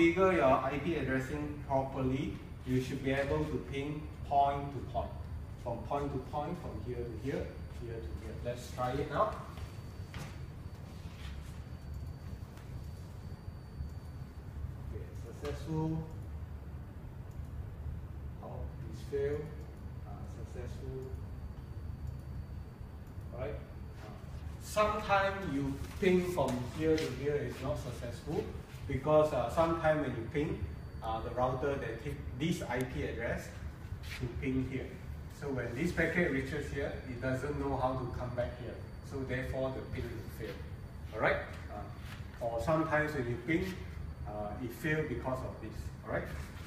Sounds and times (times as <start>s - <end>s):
Speech: 0.0s - 9.5s, 14.9s - 16.2s, 18.4s - 21.2s, 23.3s - 46.5s.